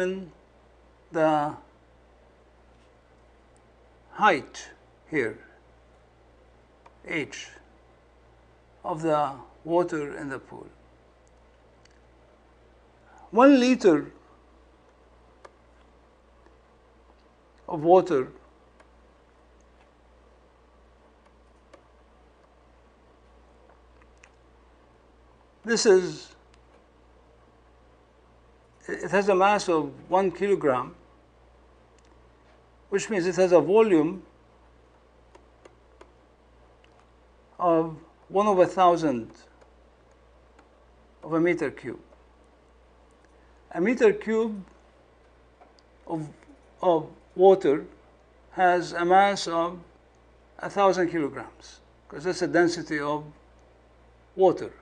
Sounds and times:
Speech: 0.0s - 0.4s, 1.1s - 1.7s, 4.1s - 5.6s, 7.0s - 7.6s, 8.8s - 10.8s, 13.3s - 14.2s, 17.7s - 18.4s, 25.6s - 26.4s, 28.8s - 31.0s, 32.9s - 34.3s, 37.6s - 39.5s, 41.2s - 42.1s, 43.7s - 44.7s, 46.1s - 49.9s, 50.6s - 53.4s, 54.4s - 54.8s.

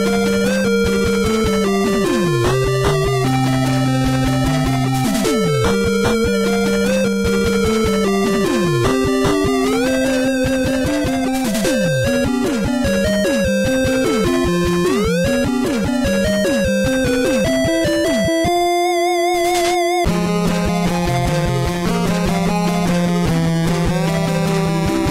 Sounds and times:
Video game music: 0.0s - 25.1s.

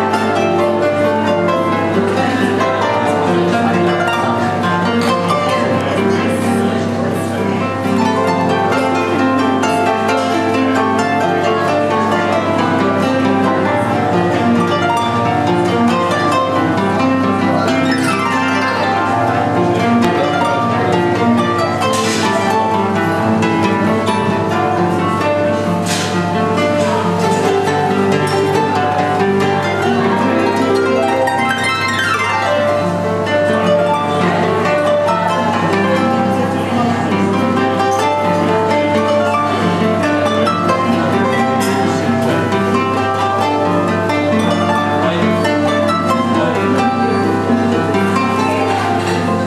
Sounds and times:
Bowed string instrument: 0.0s - 49.4s
Harp: 0.0s - 49.4s
Inside, public space: 0.0s - 49.4s.

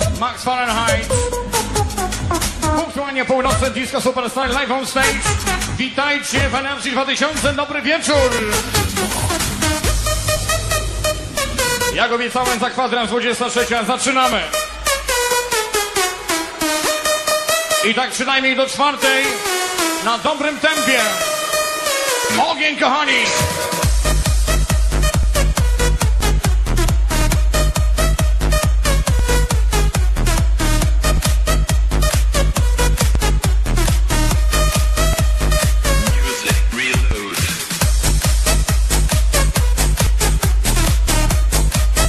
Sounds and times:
Independent music: 0.0s - 42.0s.

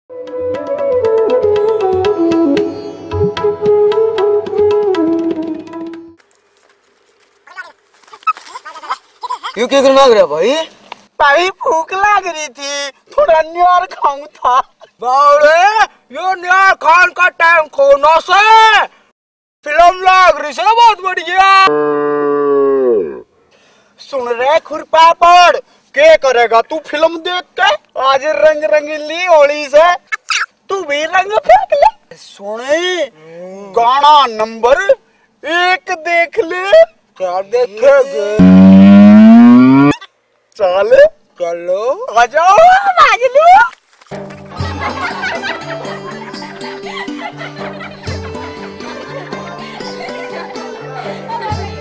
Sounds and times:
Music: 0.1s - 6.2s, 44.1s - 51.8s
Speech: 9.6s - 18.9s, 19.6s - 21.7s, 24.0s - 30.0s, 30.7s - 38.4s, 40.6s - 43.7s.

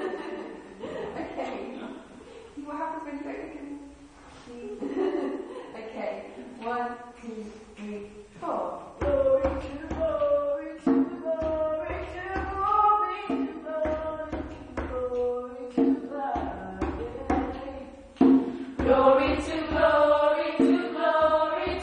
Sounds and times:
Female singing: 6.7s - 18.2s, 18.8s - 21.8s
Music: 9.0s - 21.8s.

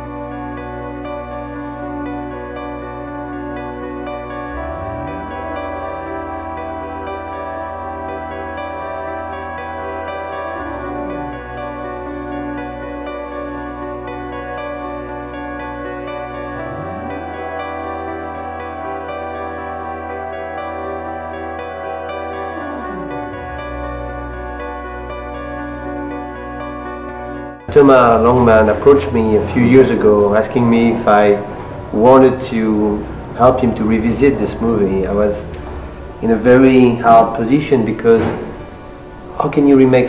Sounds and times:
Music: 0.0s - 40.0s.

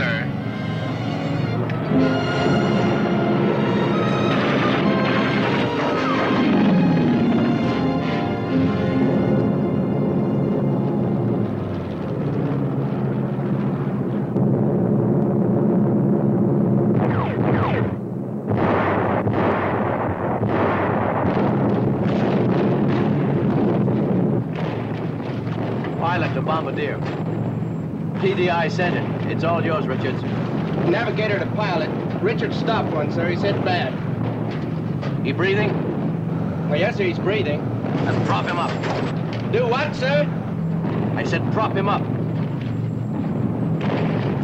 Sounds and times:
Speech: 26.0s - 27.0s, 28.2s - 30.2s, 30.9s - 34.0s, 36.7s - 38.8s, 41.2s - 42.0s.

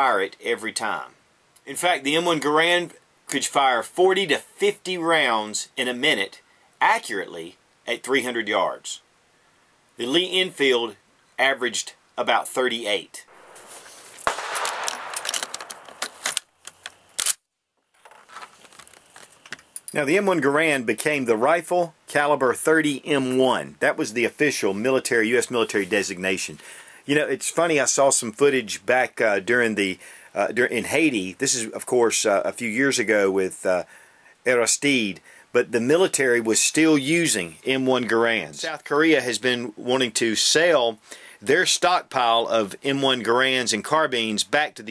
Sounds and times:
Gunshot, gunfire: 13.4s - 16.3s.

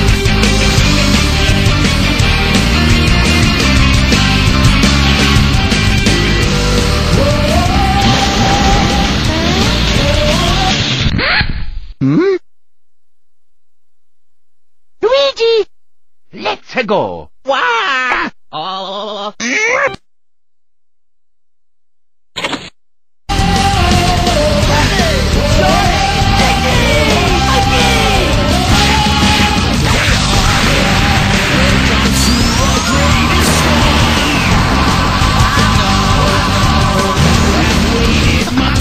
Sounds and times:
Music: 0.0s - 11.1s, 23.3s - 38.8s
Speech: 15.0s - 15.7s, 16.3s - 20.0s.

